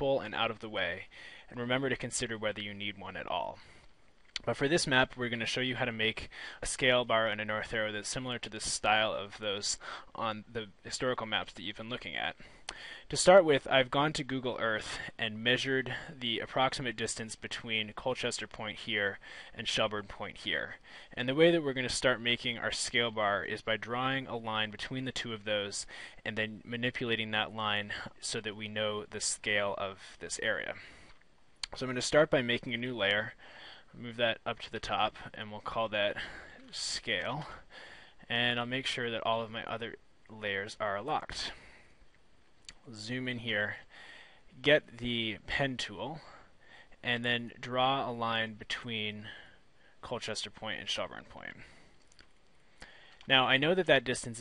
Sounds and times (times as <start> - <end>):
Speech: 0.0 - 3.6, 4.4 - 12.4, 13.1 - 30.8, 31.6 - 33.4, 34.0 - 37.6, 38.2 - 41.6, 42.7 - 43.8, 44.6 - 46.4, 47.0 - 49.4, 50.0 - 51.7, 53.3 - 54.4.